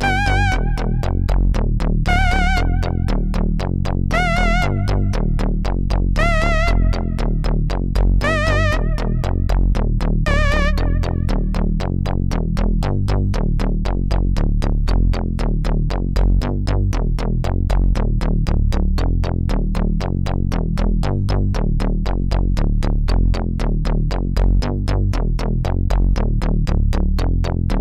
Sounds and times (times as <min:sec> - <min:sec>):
Music: 0:00.0 - 0:27.8.